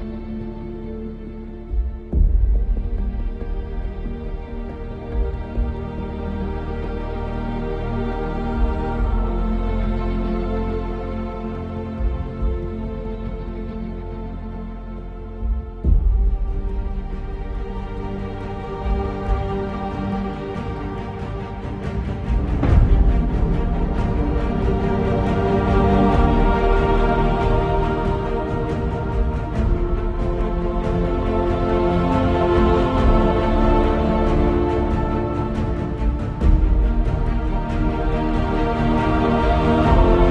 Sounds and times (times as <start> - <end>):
Tender music: 0.0 - 40.3.